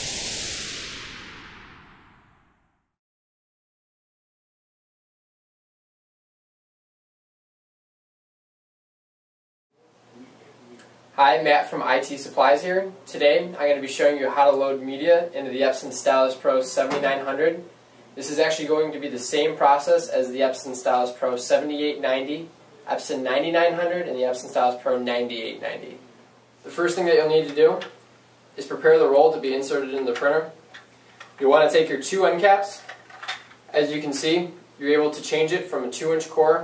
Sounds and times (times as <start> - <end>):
Speech: 9.9 - 28.0, 28.6 - 30.6, 31.4 - 32.9, 33.7 - 36.6.